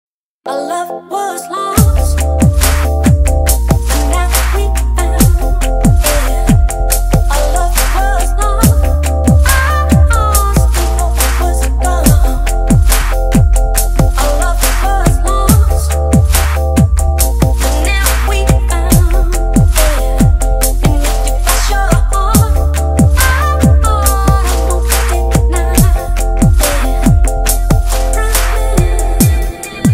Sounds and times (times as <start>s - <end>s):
Pop music: 0.5s - 29.9s.